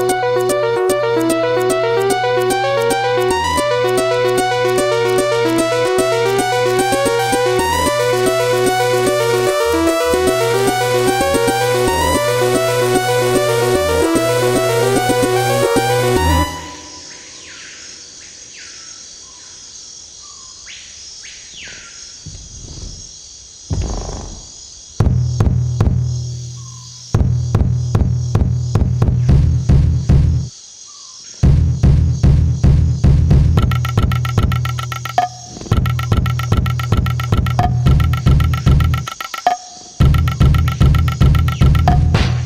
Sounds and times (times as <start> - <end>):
Music: 0.0 - 17.5, 25.0 - 30.5, 31.4 - 42.4.